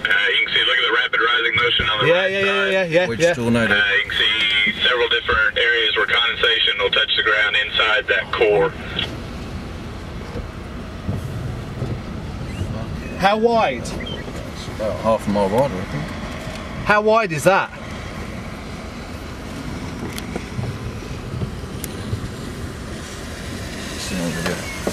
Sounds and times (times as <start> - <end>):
Car: 0.0 - 24.9
Outside, rural or natural: 0.0 - 24.9.